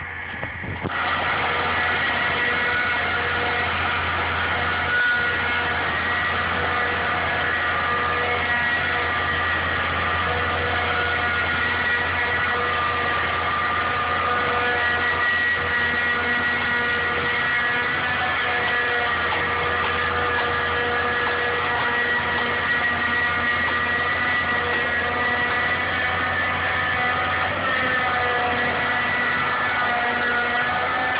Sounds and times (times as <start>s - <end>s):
Heavy engine (low frequency): 0.0s - 31.1s
Vehicle: 0.0s - 31.1s.